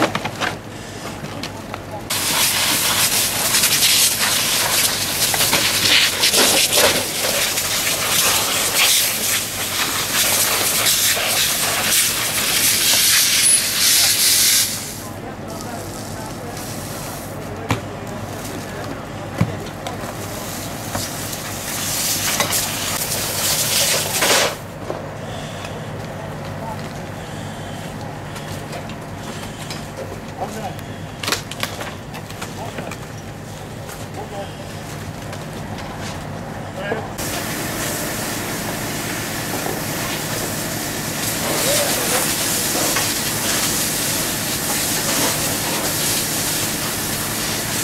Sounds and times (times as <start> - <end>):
Speech: 15.0 - 20.8, 25.6 - 27.3, 30.2 - 31.0, 32.5 - 33.0, 34.0 - 34.8, 36.7 - 37.5, 41.4 - 44.2.